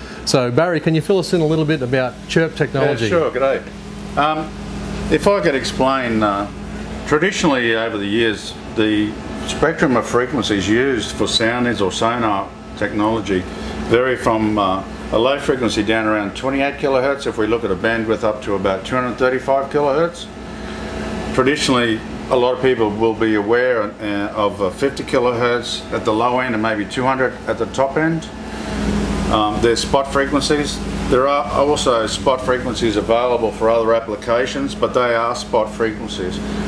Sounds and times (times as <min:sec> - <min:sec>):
Speech: 0:00.2 - 0:20.3, 0:21.3 - 0:28.3, 0:29.3 - 0:36.5.